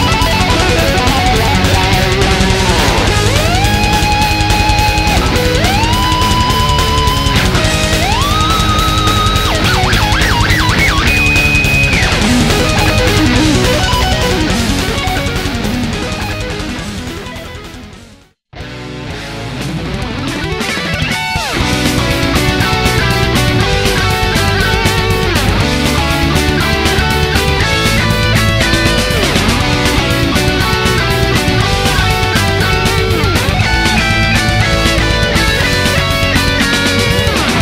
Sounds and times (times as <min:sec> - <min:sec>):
Sampler: 0:00.0 - 0:16.7, 0:21.6 - 0:37.6.